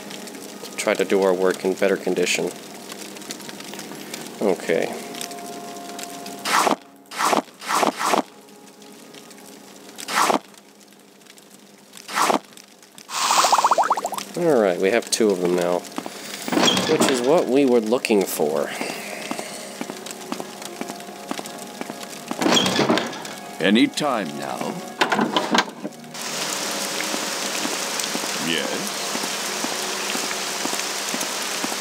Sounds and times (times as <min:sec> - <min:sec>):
Music: 0:00.0 - 0:10.1, 0:14.4 - 0:31.8
Raindrop: 0:00.0 - 0:31.8
Speech: 0:00.8 - 0:02.6, 0:04.4 - 0:05.0, 0:14.4 - 0:15.8, 0:16.9 - 0:19.0, 0:23.6 - 0:24.8, 0:28.4 - 0:28.9.